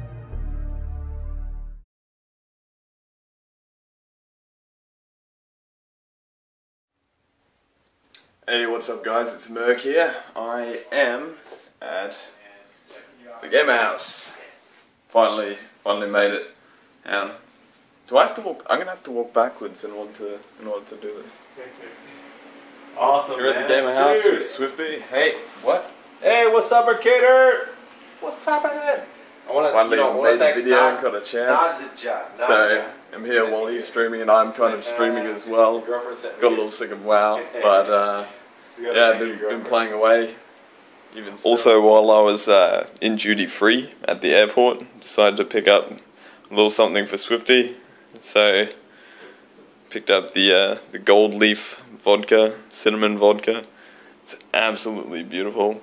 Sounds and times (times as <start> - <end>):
Speech: 8.5 - 17.5, 18.1 - 22.2, 23.0 - 40.5, 41.1 - 48.8, 49.9 - 53.7, 54.3 - 55.8.